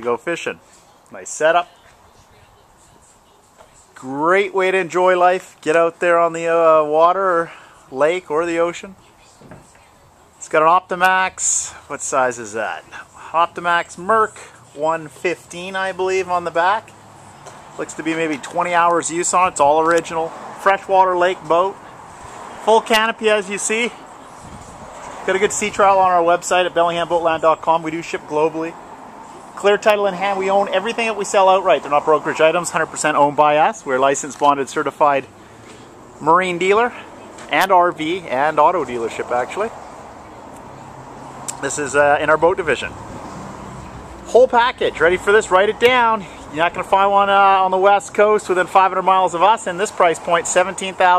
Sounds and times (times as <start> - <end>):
Speech: 0.0 - 16.9, 17.8 - 21.8, 22.6 - 24.6, 25.2 - 28.8, 29.6 - 35.3, 36.2 - 39.8, 41.5 - 43.0, 44.3 - 51.1.